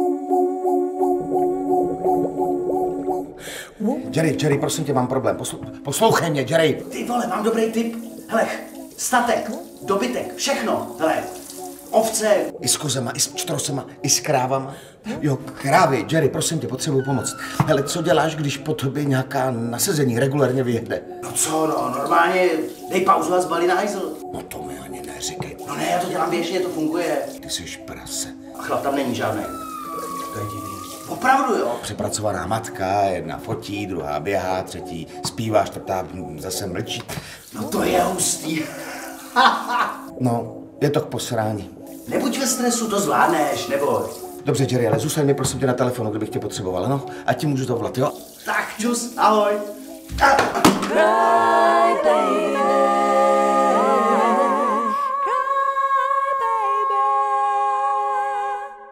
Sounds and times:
Music: 0:00.0 - 0:58.9
Speech: 0:03.8 - 0:11.3, 0:12.0 - 0:29.6, 0:30.4 - 0:38.7, 0:40.2 - 0:50.6.

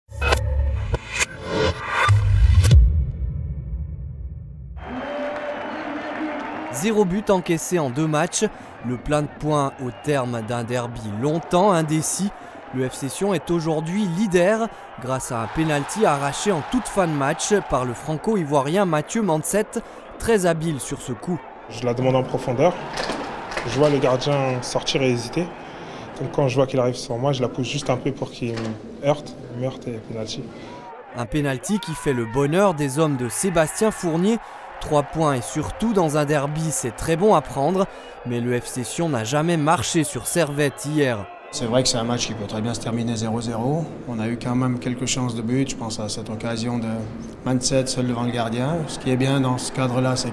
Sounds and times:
Music: 0:00.1 - 0:04.8
Speech: 0:05.9 - 0:22.8, 0:23.6 - 0:25.5, 0:26.2 - 0:30.5, 0:31.2 - 0:50.3.

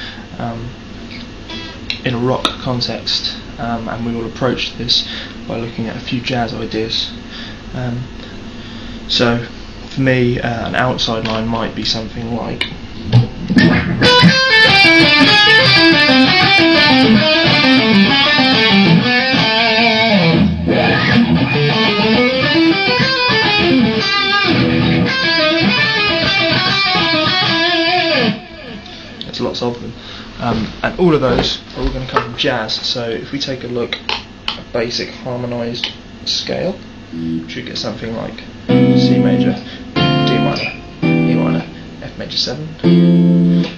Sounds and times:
Speech: 0:00.3 - 0:00.8, 0:02.0 - 0:08.2, 0:09.1 - 0:12.7, 0:29.2 - 0:34.0, 0:34.7 - 0:36.8, 0:37.5 - 0:42.8
Music: 0:13.1 - 0:29.2, 0:37.2 - 0:37.7, 0:38.7 - 0:42.0, 0:42.8 - 0:43.7.

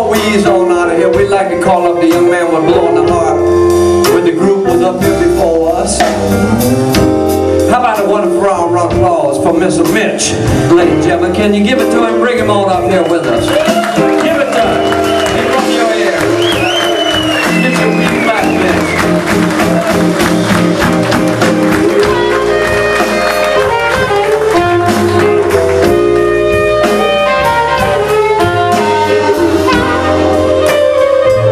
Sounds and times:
Speech: 0:00.0 - 0:03.4, 0:04.1 - 0:06.2, 0:07.7 - 0:16.3
Music: 0:00.0 - 0:31.5.

